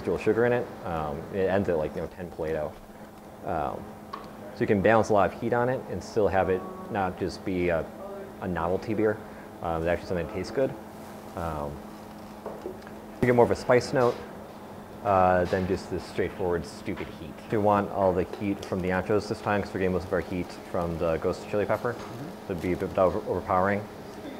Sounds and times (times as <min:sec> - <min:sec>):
Speech: 0:00.0 - 0:02.8, 0:03.4 - 0:03.8, 0:04.6 - 0:10.8, 0:11.4 - 0:11.8, 0:13.2 - 0:14.2, 0:15.0 - 0:24.3.